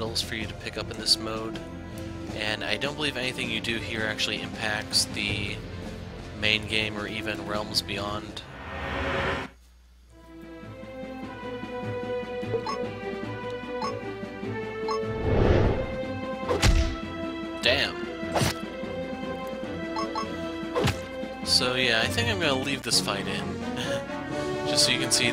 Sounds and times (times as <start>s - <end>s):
Speech: 0.0s - 1.6s, 2.3s - 5.6s, 6.4s - 8.5s, 17.6s - 18.0s, 21.5s - 24.0s, 24.7s - 25.3s
Music: 0.0s - 25.3s
Thump, thud: 16.5s - 17.0s.